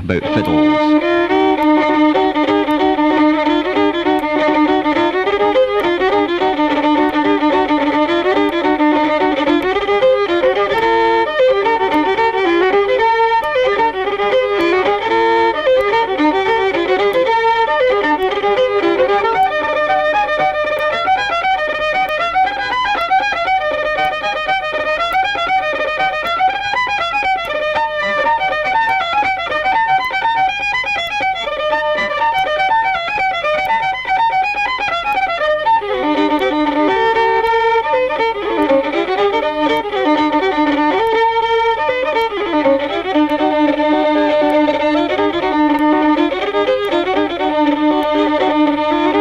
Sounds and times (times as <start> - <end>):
Violin, fiddle: 0.0 - 49.2.